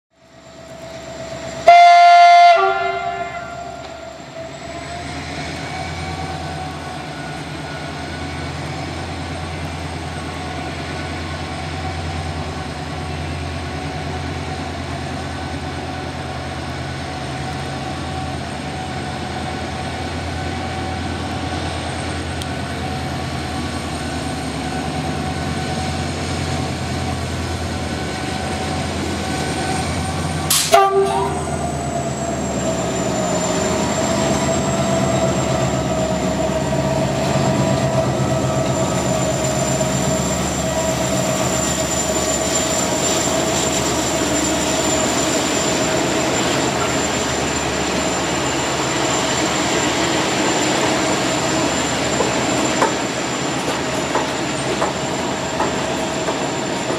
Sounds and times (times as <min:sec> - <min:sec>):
Train horn: 0:01.6 - 0:04.5, 0:30.5 - 0:31.7.